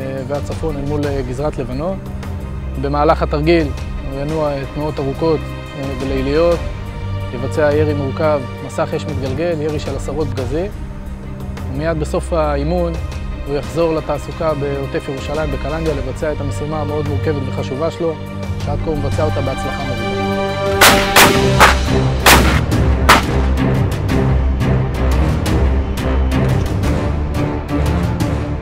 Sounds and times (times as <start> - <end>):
Speech: 0.0 - 2.0, 2.8 - 6.6, 7.3 - 10.8, 11.7 - 20.0
Music: 0.0 - 28.6.